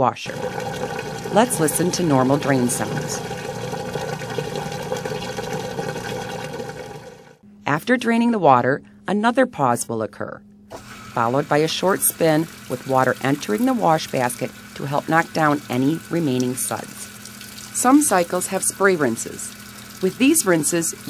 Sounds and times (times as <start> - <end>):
Water: 0.3 - 7.4, 10.8 - 21.1.